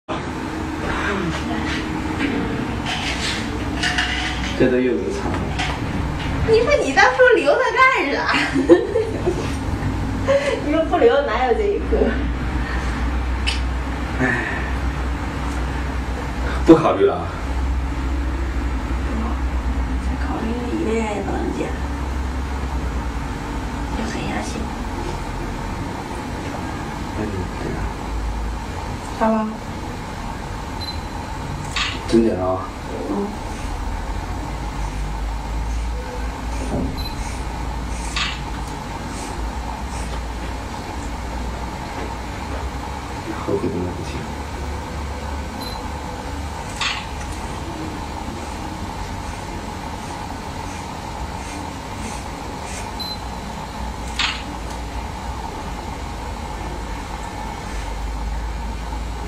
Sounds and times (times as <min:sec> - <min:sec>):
Female speech, woman speaking: 0:01.0 - 0:01.8, 0:06.5 - 0:08.6, 0:10.4 - 0:12.3, 0:19.1 - 0:21.9, 0:24.0 - 0:24.8, 0:29.2 - 0:29.6
Laughter: 0:08.2 - 0:09.6.